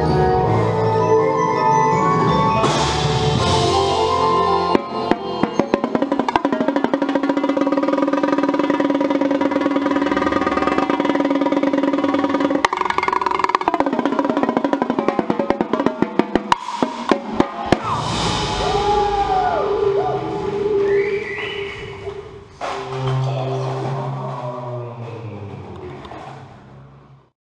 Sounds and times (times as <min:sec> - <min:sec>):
Musical instrument: 0:00.0 - 0:21.9, 0:22.6 - 0:25.0.